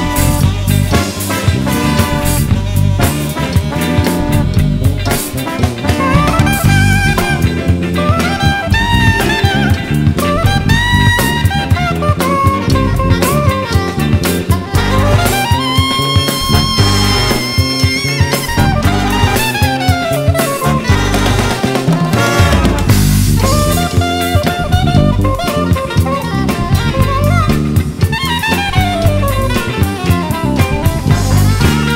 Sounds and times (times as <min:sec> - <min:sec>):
Jazz: 0:00.0 - 0:31.9
Orchestra: 0:00.0 - 0:31.9.